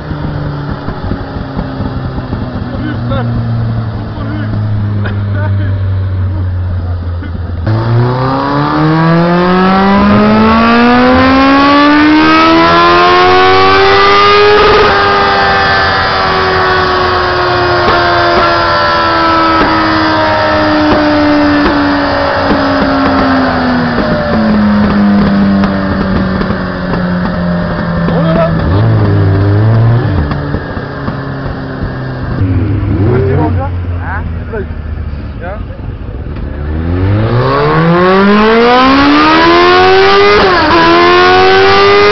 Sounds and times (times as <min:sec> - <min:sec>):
Speech: 0:02.7 - 0:03.3, 0:04.2 - 0:04.5, 0:05.3 - 0:07.3, 0:28.1 - 0:28.6, 0:33.1 - 0:34.7, 0:35.4 - 0:35.8.